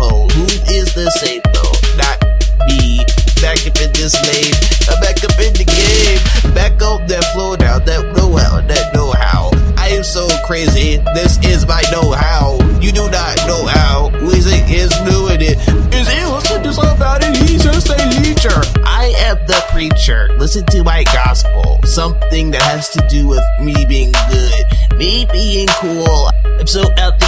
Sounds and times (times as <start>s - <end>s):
Music: 0.0s - 27.2s.